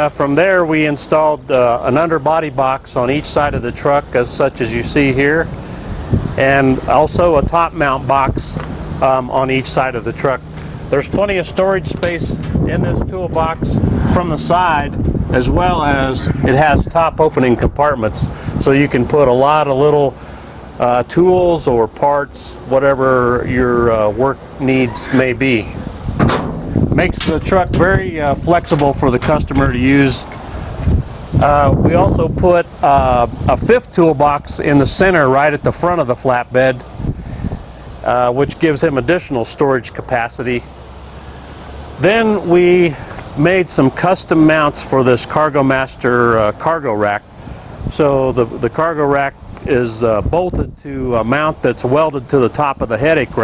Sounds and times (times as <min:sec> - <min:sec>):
Speech: 0:00.0 - 0:05.5, 0:06.4 - 0:20.2, 0:20.8 - 0:25.8, 0:27.0 - 0:30.3, 0:31.4 - 0:36.9, 0:38.0 - 0:40.7, 0:42.0 - 0:47.2, 0:47.9 - 0:53.4.